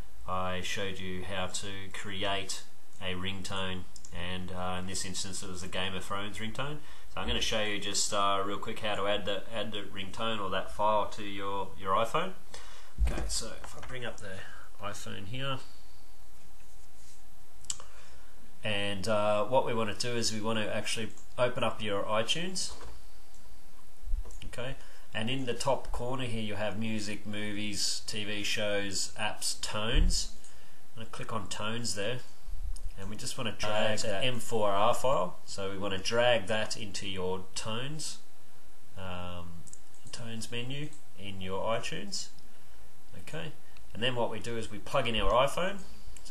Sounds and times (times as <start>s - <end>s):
Speech: 0.2s - 12.4s, 13.0s - 15.7s, 18.6s - 22.9s, 24.4s - 30.4s, 31.0s - 32.4s, 33.0s - 38.3s, 39.0s - 42.4s, 43.1s - 46.3s.